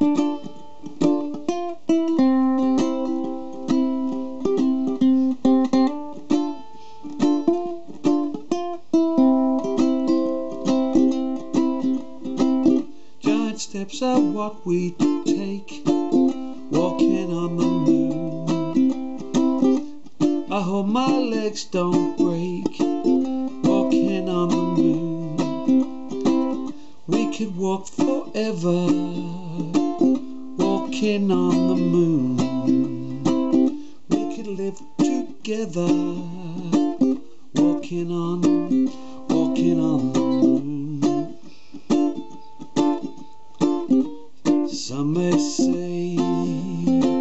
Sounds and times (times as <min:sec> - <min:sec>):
Inside, small room: 0:00.0 - 0:47.2
Ukulele: 0:00.0 - 0:47.2.